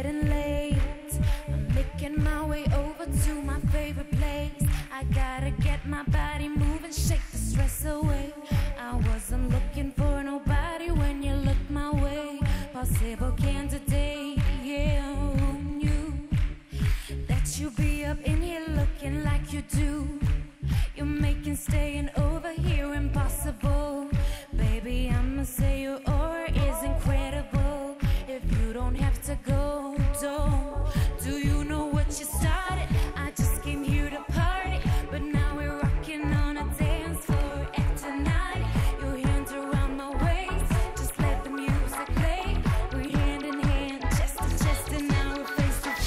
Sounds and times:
Music: 0:00.0 - 0:46.0.

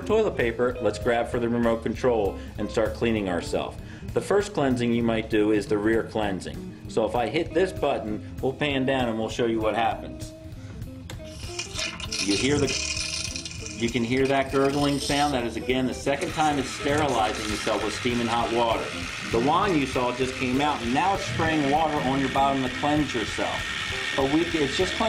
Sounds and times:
Speech: 0:00.0 - 0:10.3, 0:12.2 - 0:12.8, 0:13.8 - 0:23.6, 0:24.2 - 0:25.0
Music: 0:00.0 - 0:25.0.

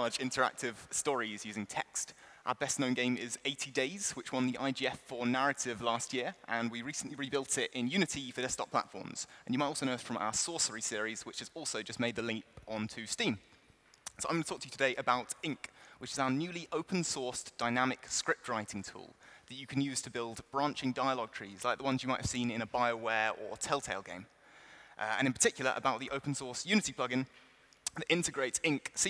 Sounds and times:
Speech: 0:00.0 - 0:13.4, 0:14.1 - 0:24.3, 0:25.0 - 0:27.3, 0:27.9 - 0:29.1.

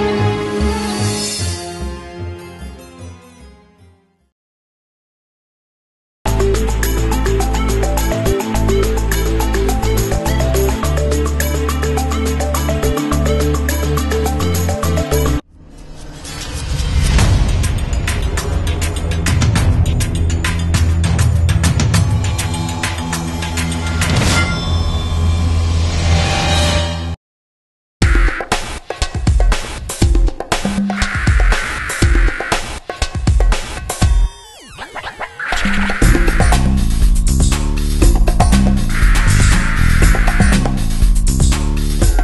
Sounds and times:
Music: 0:00.0 - 0:04.4, 0:06.3 - 0:27.2, 0:28.0 - 0:42.2.

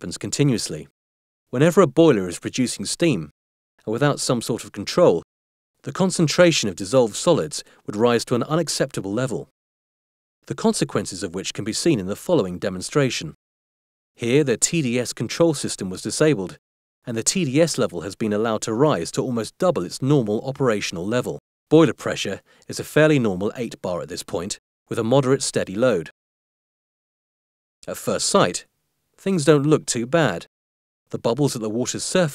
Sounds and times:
Speech: 0:00.0 - 0:00.9, 0:01.6 - 0:09.5, 0:10.5 - 0:13.4, 0:14.2 - 0:26.2, 0:27.8 - 0:30.5, 0:31.1 - 0:32.3.

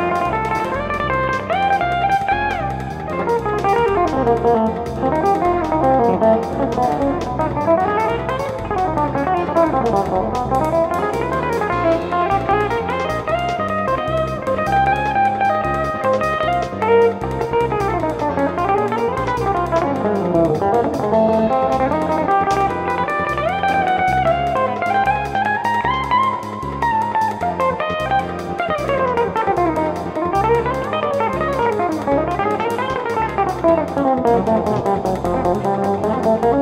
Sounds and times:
Strum: 0:00.0 - 0:36.6.

